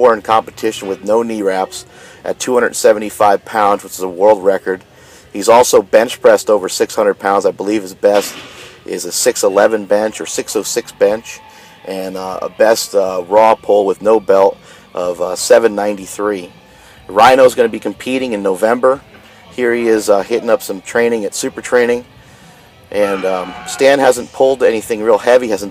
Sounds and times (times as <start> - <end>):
Speech: 0.0 - 4.8, 5.4 - 8.3, 8.9 - 16.5, 17.1 - 22.0, 22.9 - 25.7.